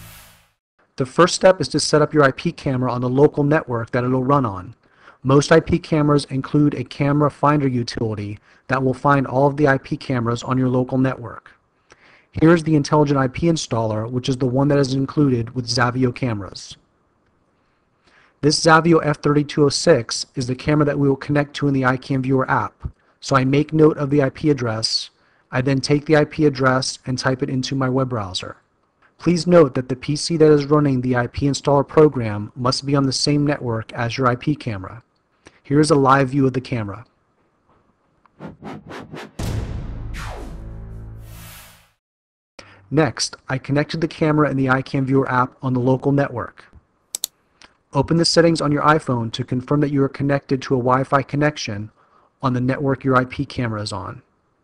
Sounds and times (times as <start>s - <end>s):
Speech: 1.0s - 11.6s, 12.4s - 16.8s, 18.4s - 28.6s, 29.2s - 35.0s, 35.6s - 37.1s, 42.8s - 46.8s, 47.9s - 54.3s.